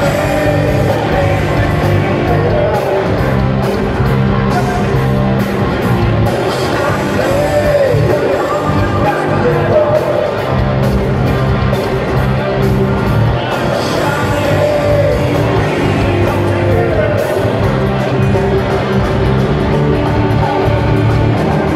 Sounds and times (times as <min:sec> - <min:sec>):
Electric guitar: 0:00.0 - 0:21.7.